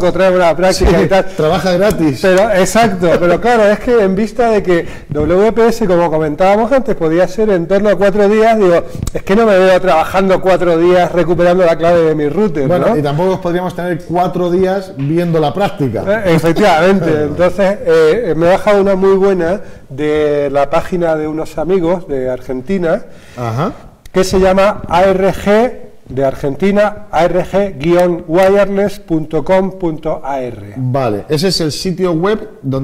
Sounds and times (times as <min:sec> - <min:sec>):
Speech: 0:00.0 - 0:32.8.